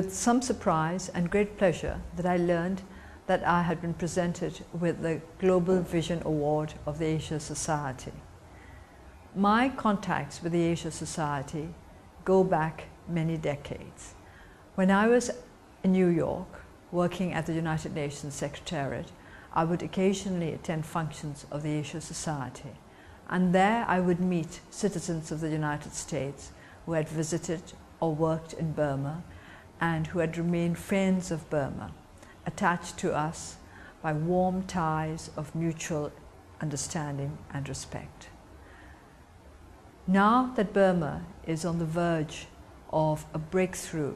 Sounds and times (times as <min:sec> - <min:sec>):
Female speech, woman speaking: 0:00.0 - 0:08.2, 0:09.4 - 0:14.2, 0:14.8 - 0:38.3, 0:40.1 - 0:44.1.